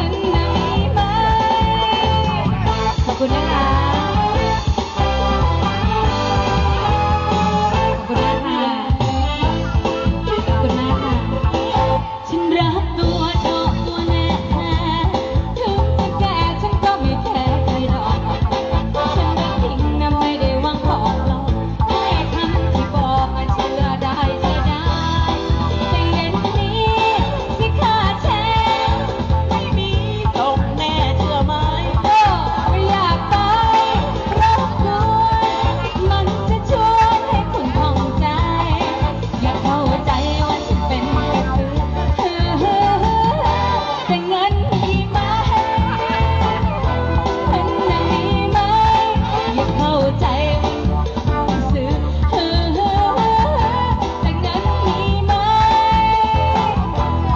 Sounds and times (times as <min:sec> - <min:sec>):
Music: 0:00.0 - 0:57.3
Outside, urban or manmade: 0:00.0 - 0:57.3.